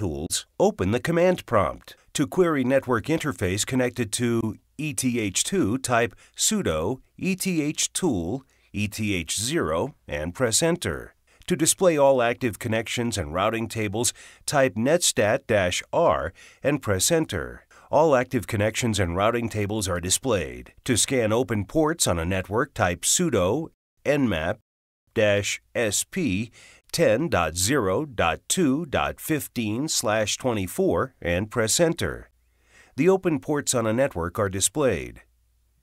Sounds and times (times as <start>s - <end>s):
Speech: 0.0s - 32.3s, 33.0s - 35.3s.